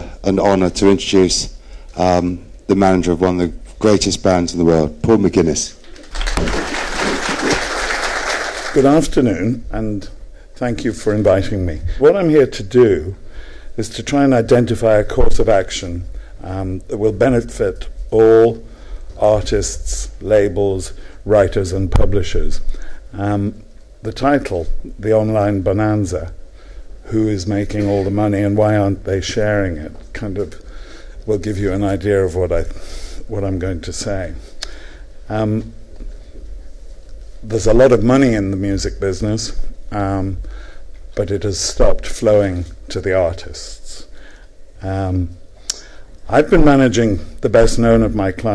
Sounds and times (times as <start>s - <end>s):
Male speech, man speaking: 0.0s - 5.8s, 8.8s - 13.2s, 13.8s - 18.6s, 19.2s - 26.4s, 27.1s - 30.6s, 31.3s - 34.4s, 35.3s - 35.7s, 37.4s - 40.4s, 41.2s - 44.1s, 44.8s - 45.4s, 46.3s - 48.5s
Narration, monologue: 0.0s - 48.5s.